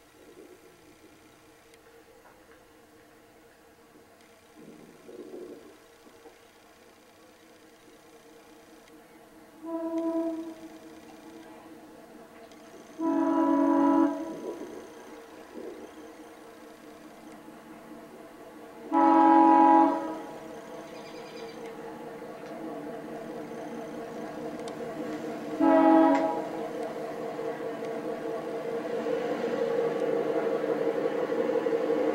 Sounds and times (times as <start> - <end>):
Railroad car, train wagon: 0.0 - 32.1
Train horn: 9.6 - 11.6, 13.0 - 14.6, 18.8 - 20.5, 25.0 - 26.7.